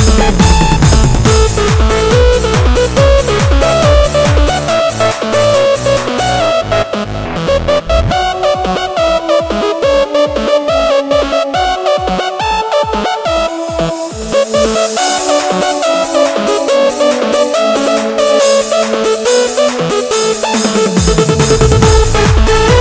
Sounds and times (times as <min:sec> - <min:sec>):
Techno: 0:00.0 - 0:22.8.